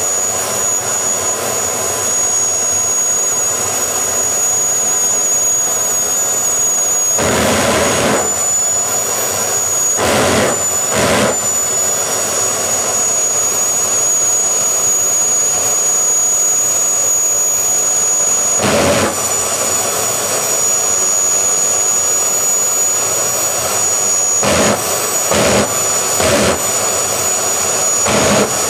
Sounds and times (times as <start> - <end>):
Jet engine: 0.0 - 28.6.